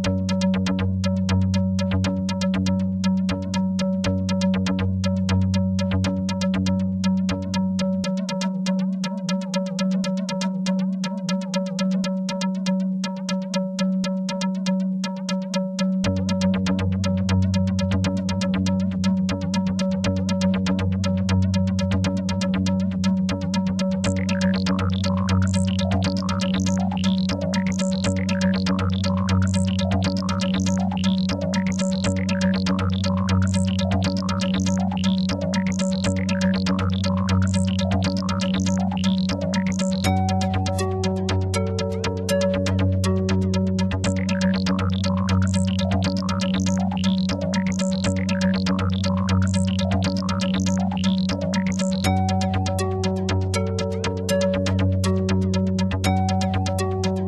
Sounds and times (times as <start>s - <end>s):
Electronic music: 0.0s - 3.6s, 16.0s - 57.2s.